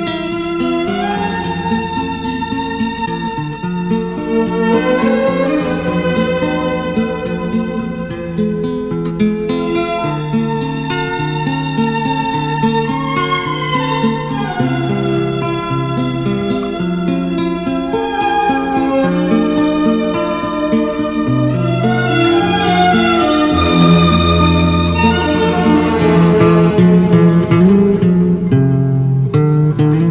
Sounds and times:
Tender music: 0:00.0 - 0:28.2.

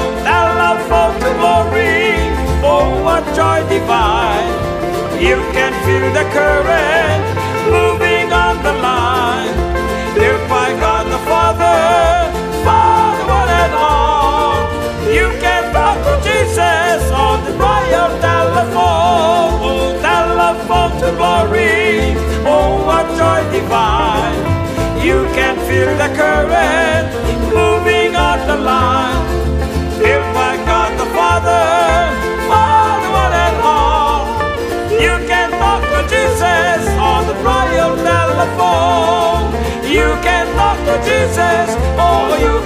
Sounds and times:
Christmas music: 0:00.0 - 0:42.6.

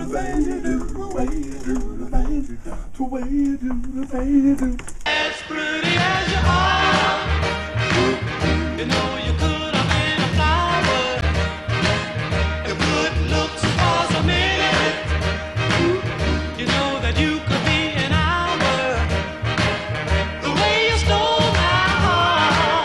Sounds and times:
Soul music: 0:00.0 - 0:22.8.

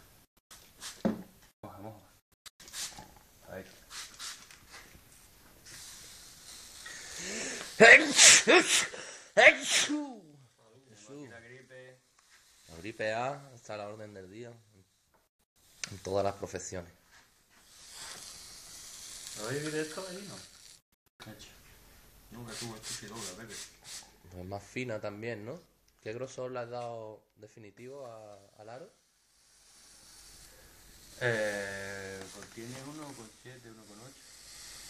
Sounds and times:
Speech: 0:22.3 - 0:23.7, 0:31.2 - 0:34.2.

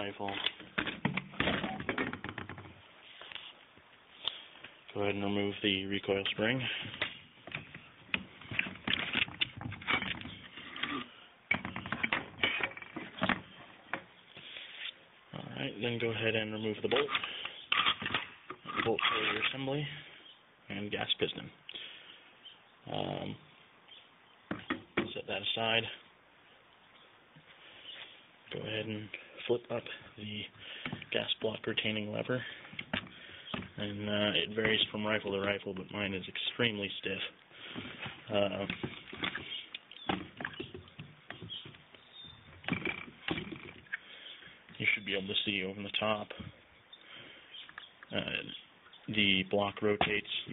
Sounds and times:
Speech: 0:00.0 - 0:00.5, 0:04.9 - 0:06.8, 0:15.3 - 0:17.2, 0:18.7 - 0:20.0, 0:20.7 - 0:21.6, 0:22.9 - 0:23.4, 0:25.1 - 0:26.0, 0:28.5 - 0:30.5, 0:31.1 - 0:32.5, 0:33.8 - 0:37.4, 0:38.3 - 0:38.8, 0:44.8 - 0:46.5, 0:48.1 - 0:50.5.

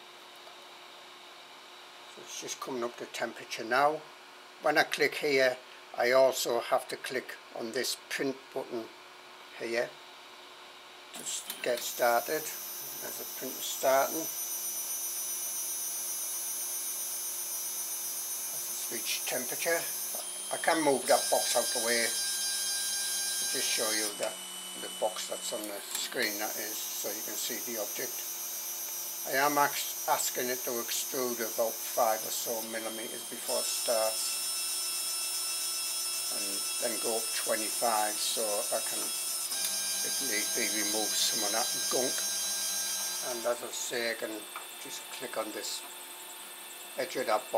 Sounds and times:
Speech: 0:02.2 - 0:08.9, 0:09.6 - 0:10.0, 0:11.2 - 0:14.3, 0:18.7 - 0:19.9, 0:20.5 - 0:22.2, 0:23.5 - 0:28.2, 0:29.3 - 0:34.3, 0:36.3 - 0:39.1, 0:40.1 - 0:42.2, 0:43.2 - 0:45.9, 0:47.0 - 0:47.5.

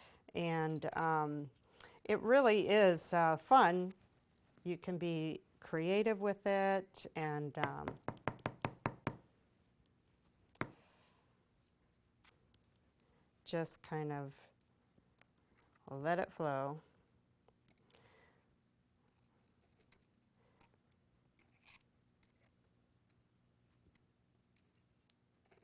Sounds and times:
Speech: 0:02.1 - 0:04.0, 0:04.6 - 0:07.9, 0:13.5 - 0:14.5, 0:15.8 - 0:16.9
Knock: 0:07.6 - 0:09.2.

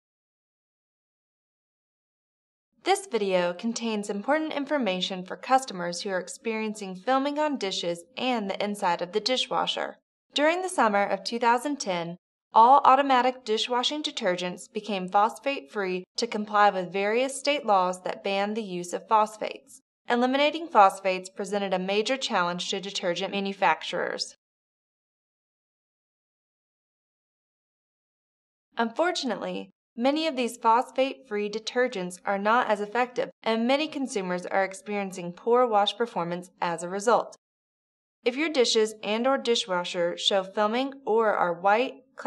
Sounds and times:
Speech: 0:02.9 - 0:24.4, 0:28.8 - 0:37.4, 0:38.3 - 0:42.2.

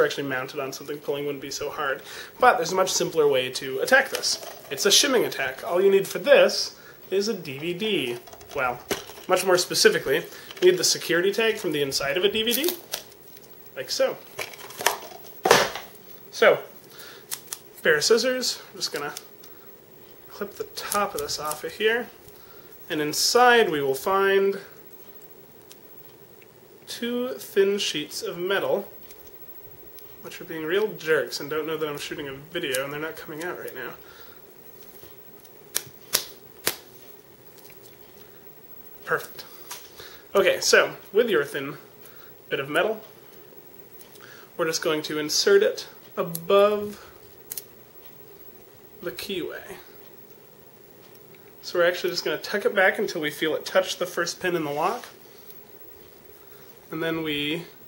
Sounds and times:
Speech: 0:00.0 - 0:12.8, 0:13.8 - 0:14.2, 0:16.3 - 0:16.7, 0:17.8 - 0:19.2, 0:20.3 - 0:22.2, 0:22.9 - 0:24.8, 0:26.9 - 0:28.9, 0:30.2 - 0:34.0, 0:39.0 - 0:39.5, 0:40.3 - 0:41.9, 0:42.5 - 0:43.0, 0:44.6 - 0:47.1, 0:49.0 - 0:50.0, 0:51.6 - 0:55.2, 0:56.9 - 0:57.8.

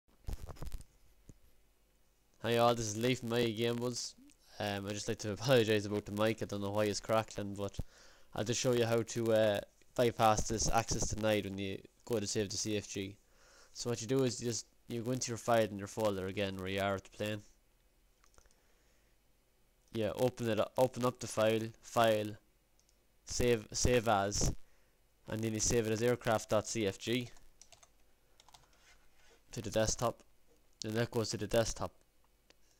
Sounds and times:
Speech: 0:02.4 - 0:07.8, 0:08.4 - 0:13.2, 0:13.8 - 0:17.5, 0:19.9 - 0:22.4, 0:23.3 - 0:24.6, 0:25.3 - 0:27.4, 0:29.5 - 0:32.0.

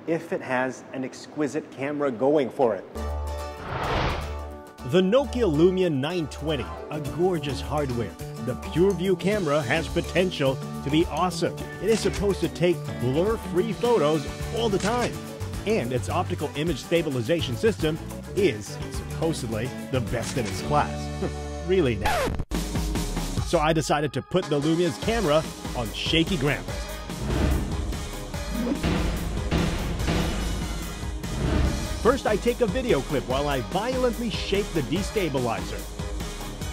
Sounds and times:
Speech: 0:00.0 - 0:02.9, 0:04.8 - 0:21.0, 0:21.7 - 0:22.1, 0:23.4 - 0:26.7, 0:32.0 - 0:35.8
Music: 0:02.9 - 0:36.7.

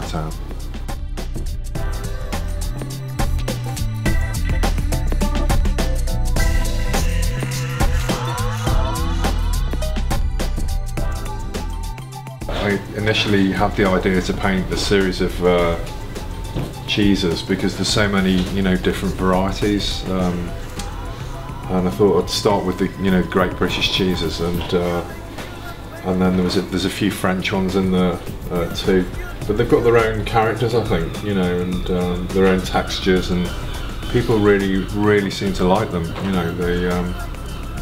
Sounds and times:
Speech: 0:00.0 - 0:00.4, 0:12.5 - 0:15.9, 0:16.9 - 0:20.6, 0:21.7 - 0:33.5, 0:34.1 - 0:37.3
Music: 0:00.0 - 0:37.8.

